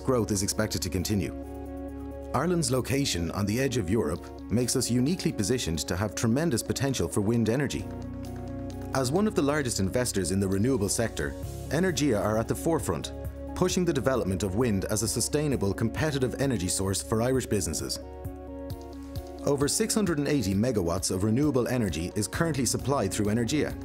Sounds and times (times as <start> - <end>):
Speech: 0.0 - 1.4, 2.3 - 7.9, 8.9 - 18.0, 19.4 - 23.8
Music: 0.0 - 23.8.